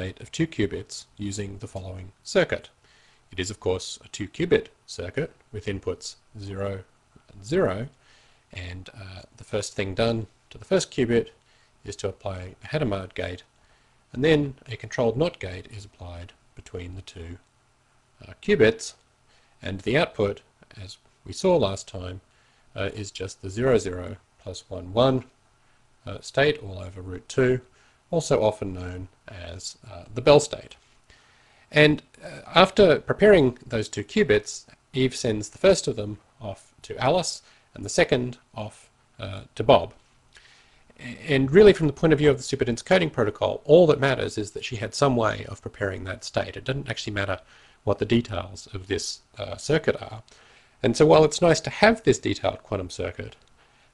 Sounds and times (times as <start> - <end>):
Speech: 0.0 - 13.5, 14.1 - 17.5, 18.2 - 19.0, 19.6 - 25.4, 26.0 - 30.8, 31.7 - 40.0, 41.0 - 53.4.